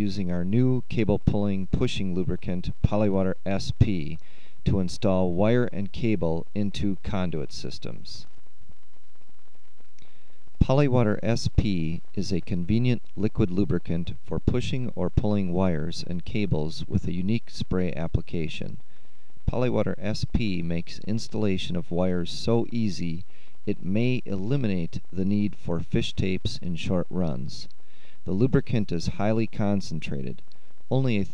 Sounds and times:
Speech: 0:00.0 - 0:08.3, 0:10.6 - 0:18.8, 0:19.5 - 0:31.3.

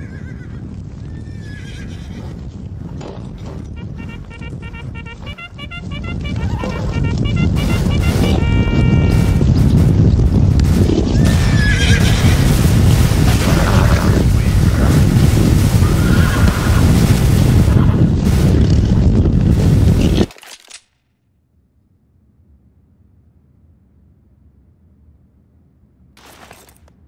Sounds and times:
Rumble: 0:00.0 - 0:20.3, 0:21.6 - 0:27.0
Sound effect: 0:03.4 - 0:09.4.

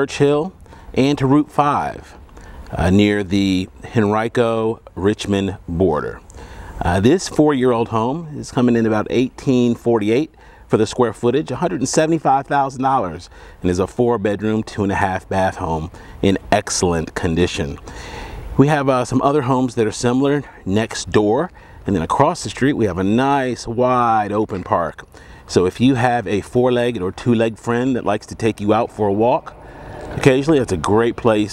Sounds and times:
Speech: 0:00.0 - 0:06.2, 0:06.8 - 0:17.8, 0:18.6 - 0:29.6, 0:30.2 - 0:31.5.

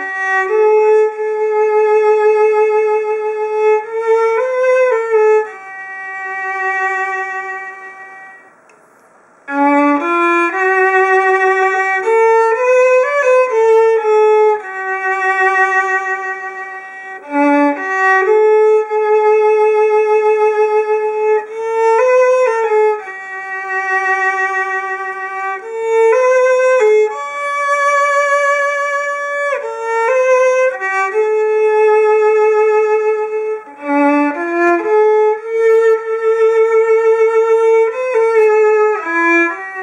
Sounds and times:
Violin, fiddle: 0:00.0 - 0:08.5, 0:09.5 - 0:39.8
Classical music: 0:00.0 - 0:08.6, 0:09.4 - 0:39.8
Inside, small room: 0:00.0 - 0:39.8.

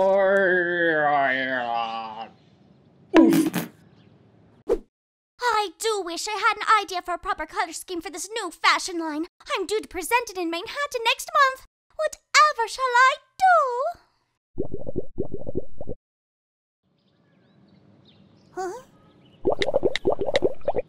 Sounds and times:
Speech: 0:05.4 - 0:14.0, 0:18.6 - 0:18.9.

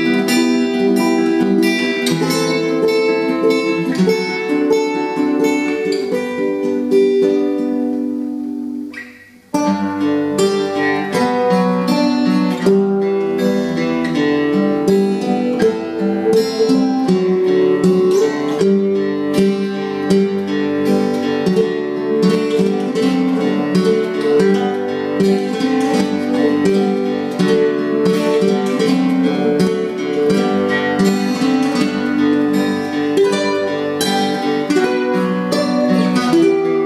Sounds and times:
Acoustic guitar: 0:00.0 - 0:36.8
Strum: 0:00.0 - 0:36.8.

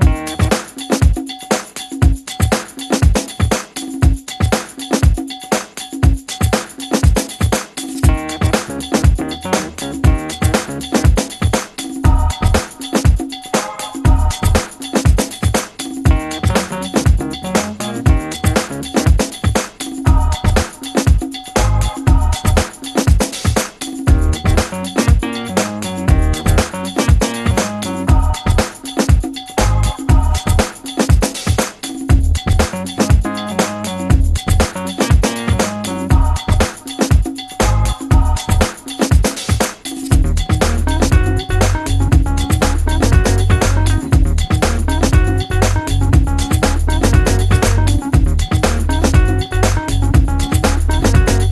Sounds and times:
Music: 0:00.0 - 0:51.5.

